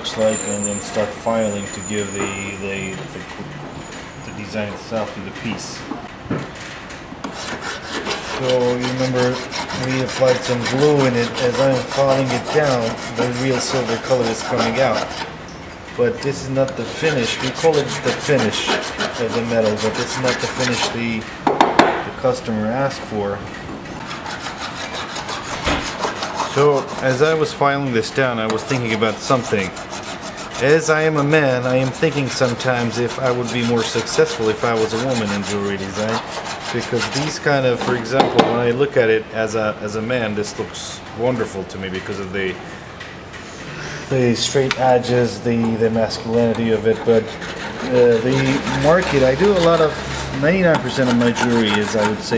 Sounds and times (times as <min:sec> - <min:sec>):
Filing (rasp): 0:07.2 - 0:15.3, 0:16.6 - 0:21.0, 0:24.0 - 0:38.2, 0:45.0 - 0:52.3
Rub: 0:07.3 - 0:15.3, 0:16.6 - 0:21.1, 0:24.0 - 0:38.1, 0:45.0 - 0:52.3.